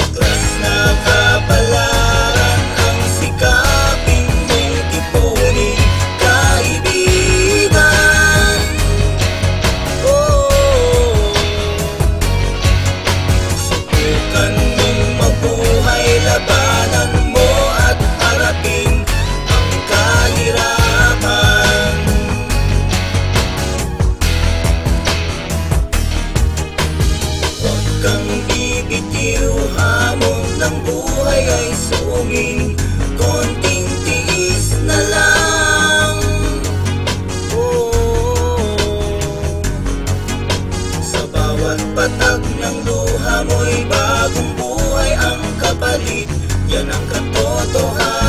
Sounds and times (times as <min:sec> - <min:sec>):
Music: 0:00.0 - 0:48.2.